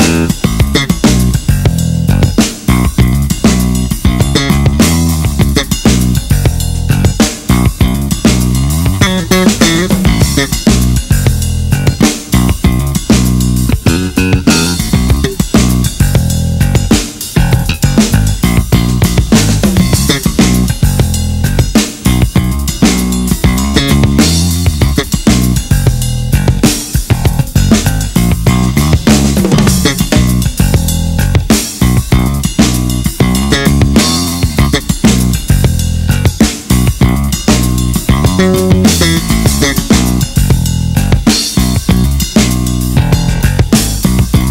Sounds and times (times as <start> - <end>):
Bass guitar: 0.0 - 44.5.